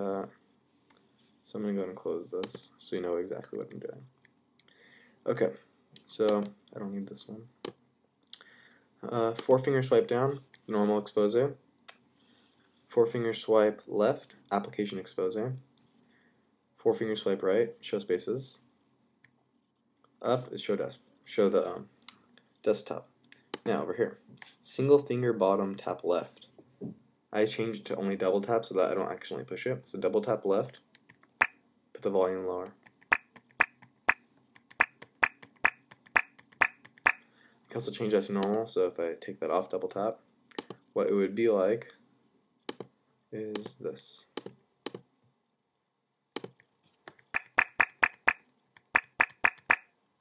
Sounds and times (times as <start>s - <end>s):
Speech: 0.0s - 0.4s, 1.4s - 4.1s, 5.2s - 7.6s, 9.0s - 11.6s, 12.9s - 15.7s, 16.8s - 18.7s, 20.2s - 26.6s, 27.3s - 30.8s, 32.0s - 32.8s, 37.7s - 40.2s, 41.0s - 42.0s, 43.3s - 44.4s.